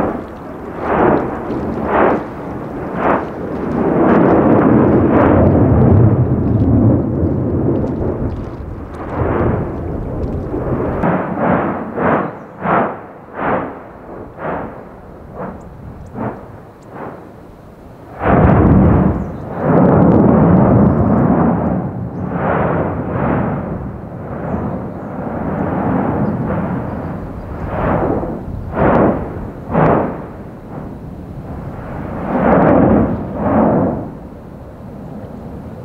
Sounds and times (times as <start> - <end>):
Eruption: 0.0 - 35.8.